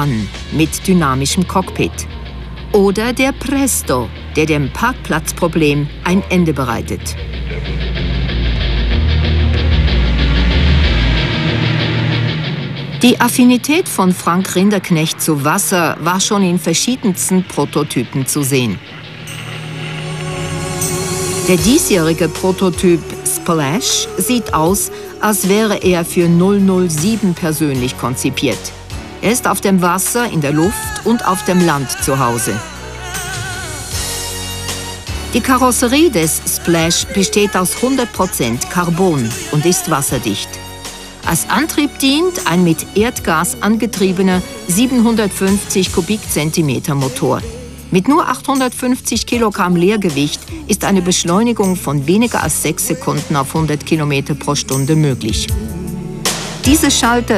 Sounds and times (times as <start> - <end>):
Speech: 0.0 - 2.1, 2.8 - 7.9, 13.0 - 18.8, 21.5 - 32.8, 35.4 - 40.6, 41.3 - 55.6, 56.7 - 57.3
Music: 0.0 - 57.3.